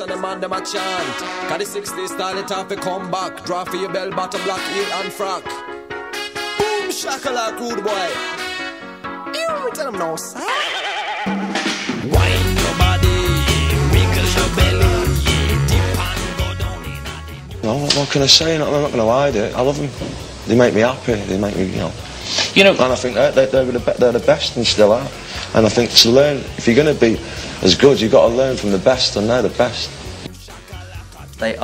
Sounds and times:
Speech: 6.6 - 8.2, 17.6 - 29.9, 31.4 - 31.6.

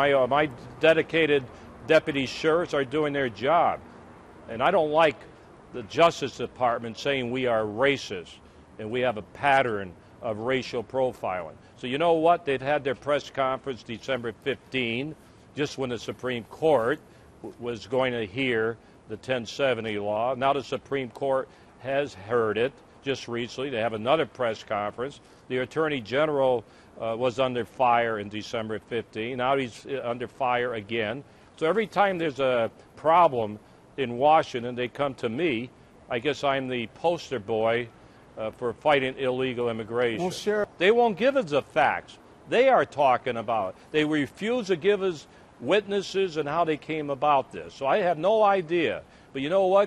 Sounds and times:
Speech: 0.0 - 3.8, 4.5 - 5.2, 5.8 - 49.8.

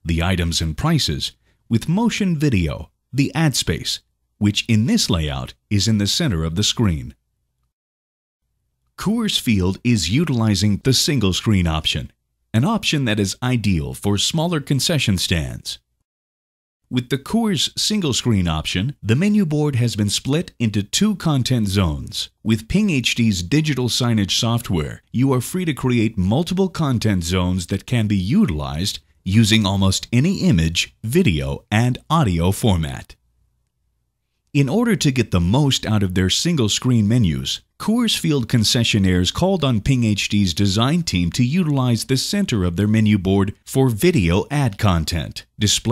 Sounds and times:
Speech: 0.0 - 7.2, 9.0 - 15.8, 16.9 - 33.2, 34.6 - 45.9.

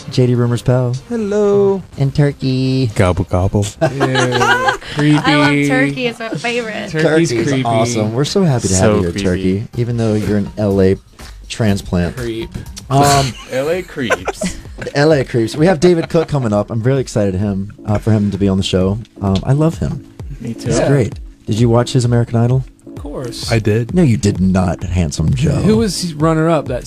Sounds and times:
Music: 0.0 - 26.8
Speech: 7.0 - 26.8.

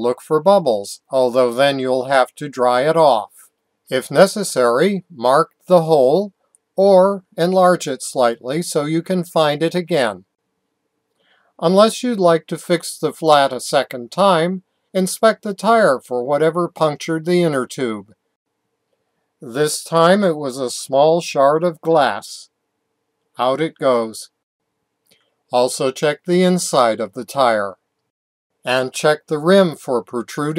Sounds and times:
Speech: 0.0 - 10.2, 11.6 - 18.1, 19.4 - 22.5, 23.4 - 24.4, 25.5 - 27.8, 28.7 - 30.5.

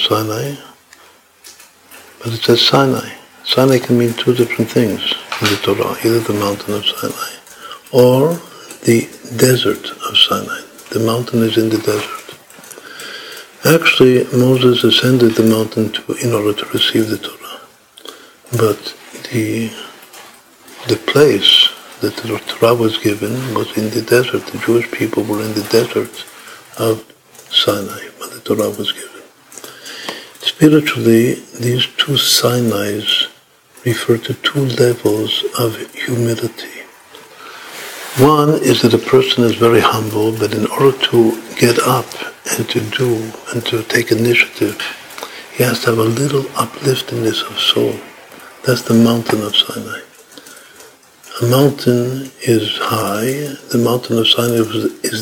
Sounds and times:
Speech: 0.0 - 0.8, 2.2 - 12.4, 13.5 - 17.7, 18.5 - 29.4, 30.4 - 37.0, 37.9 - 50.2, 51.2 - 55.2
Inside, small room: 0.0 - 55.2.

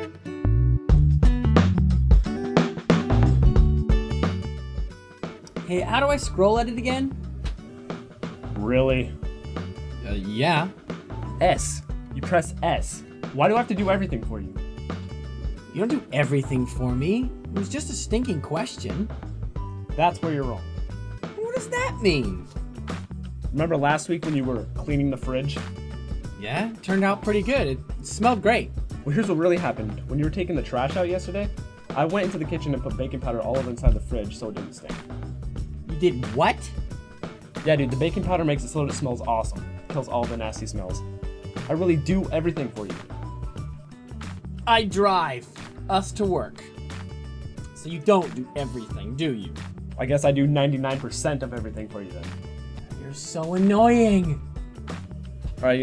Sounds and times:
Music: 0.0 - 55.8
Speech: 10.0 - 10.8, 11.4 - 14.5, 15.8 - 19.1, 20.0 - 20.6, 23.5 - 25.6, 26.4 - 35.0, 35.9 - 36.7, 37.6 - 41.0, 41.7 - 43.0, 44.7 - 46.7, 47.8 - 52.3, 53.0 - 54.4, 55.6 - 55.8.

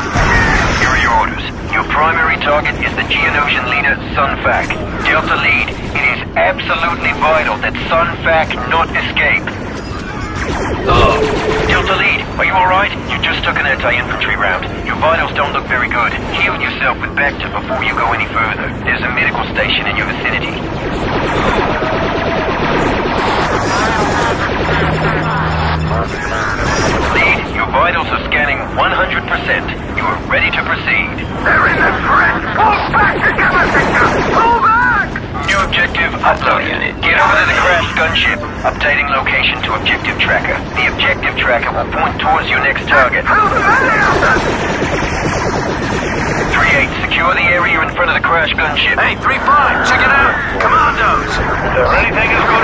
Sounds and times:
Speech: 0.2 - 9.6, 10.9 - 20.6, 25.9 - 44.6, 46.4 - 52.6.

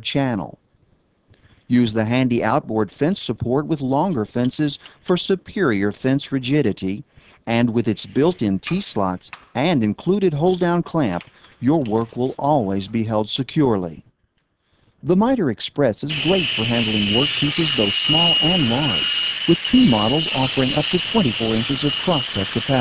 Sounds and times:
Speech: 0.0 - 0.6, 1.7 - 14.1, 15.0 - 22.8.

